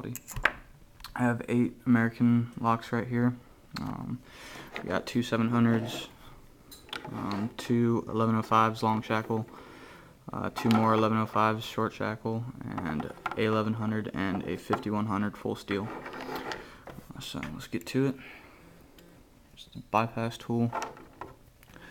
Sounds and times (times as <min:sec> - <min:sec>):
Speech: 0:01.1 - 0:04.2, 0:04.8 - 0:06.2, 0:07.0 - 0:09.5, 0:10.3 - 0:16.0, 0:17.1 - 0:18.2, 0:19.6 - 0:20.8.